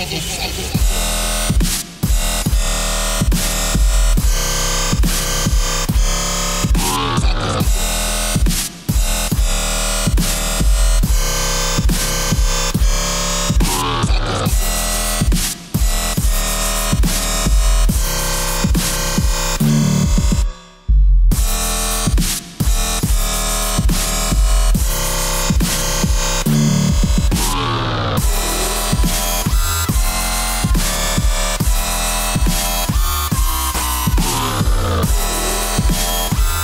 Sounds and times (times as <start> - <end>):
Dubstep: 0.0 - 36.6.